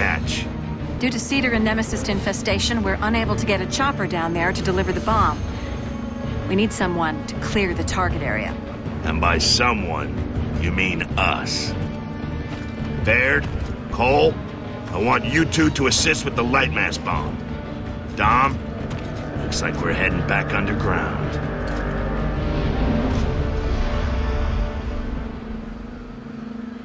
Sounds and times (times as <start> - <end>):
Music: 0.0 - 26.8.